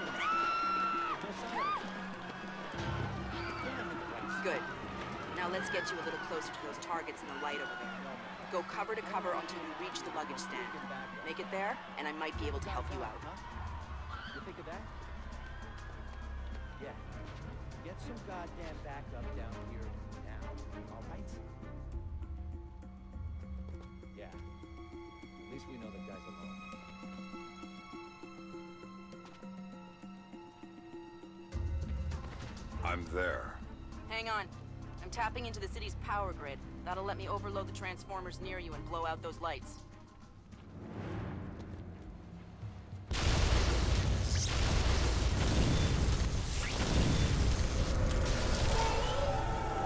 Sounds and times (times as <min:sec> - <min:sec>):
Music: 0:00.0 - 0:49.8.